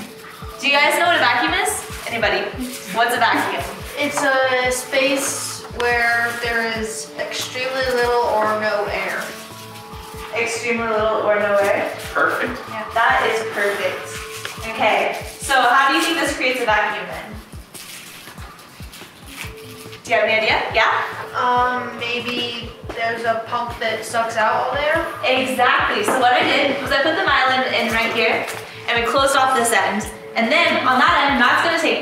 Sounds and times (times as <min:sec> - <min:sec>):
Music: 0:00.0 - 0:32.0.